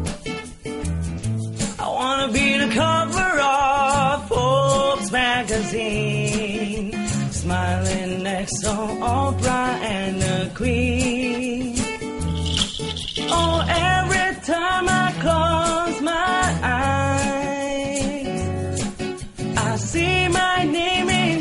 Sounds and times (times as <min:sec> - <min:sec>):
Percussion: 0:00.0 - 0:21.4.